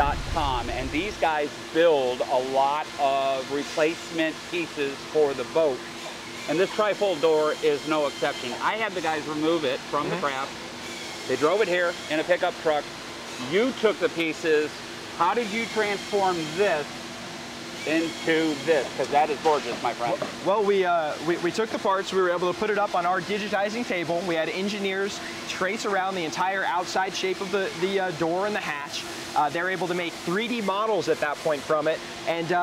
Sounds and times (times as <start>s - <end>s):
Speech: 0.0s - 5.8s, 6.5s - 10.5s, 11.3s - 16.9s, 17.8s - 32.6s.